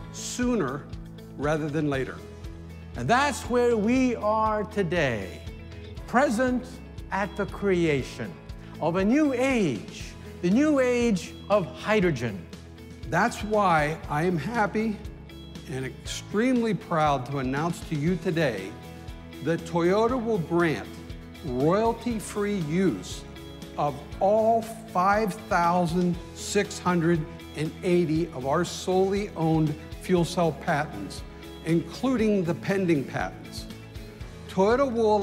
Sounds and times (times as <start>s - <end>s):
Music: 0.0s - 35.2s
Speech: 0.2s - 2.2s, 3.0s - 5.5s, 6.1s - 12.5s, 13.1s - 15.1s, 15.7s - 18.8s, 19.4s - 23.2s, 23.8s - 33.7s, 34.5s - 35.2s.